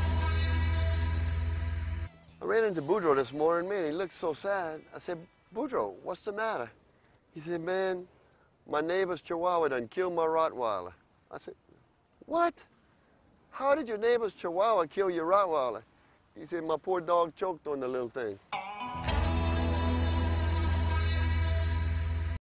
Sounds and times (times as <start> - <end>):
Music: 0.0 - 3.0, 18.5 - 22.4
Speech: 2.4 - 6.8, 7.4 - 8.1, 8.7 - 11.6, 12.2 - 12.7, 13.5 - 18.4.